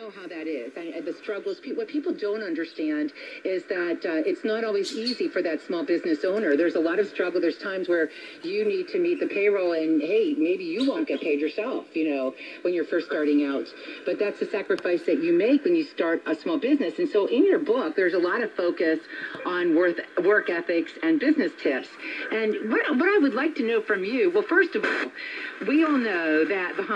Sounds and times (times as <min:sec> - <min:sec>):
Radio: 0:00.0 - 0:26.9
Speech: 0:00.0 - 0:26.9.